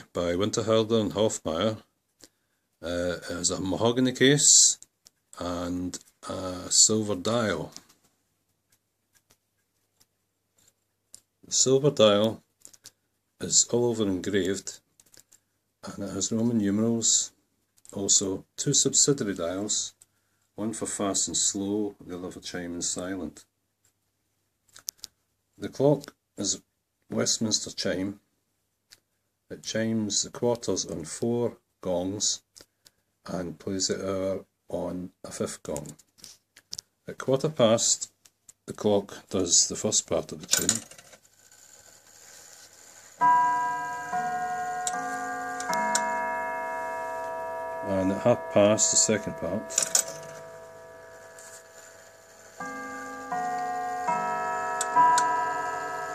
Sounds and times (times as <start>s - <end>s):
Speech: 0.0s - 1.9s, 2.8s - 4.8s, 5.4s - 7.9s, 11.4s - 12.5s, 13.4s - 14.9s, 15.8s - 20.0s, 20.6s - 23.5s, 25.6s - 28.3s, 29.5s - 32.5s, 33.2s - 36.0s, 37.1s - 40.9s, 47.8s - 50.4s.